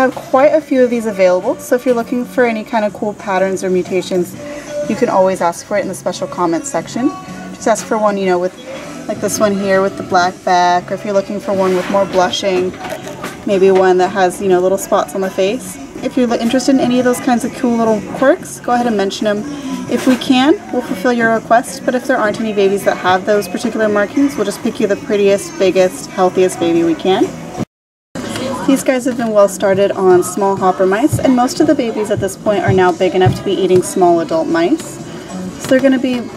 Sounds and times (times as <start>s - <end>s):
Speech: 0.0s - 27.4s, 28.3s - 35.0s, 35.6s - 36.3s
Music: 0.0s - 36.3s.